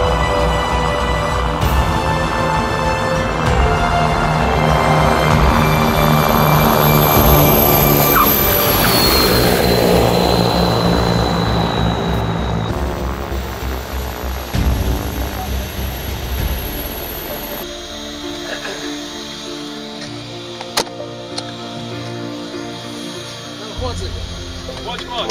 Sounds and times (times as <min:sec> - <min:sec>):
Fixed-wing aircraft, airplane: 0:00.0 - 0:25.3
Music: 0:00.0 - 0:25.3
Outside, urban or manmade: 0:00.0 - 0:25.3.